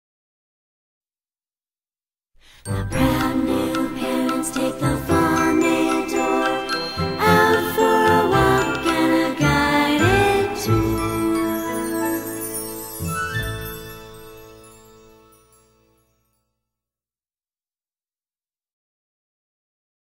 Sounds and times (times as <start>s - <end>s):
Christmas music: 2.4s - 16.5s.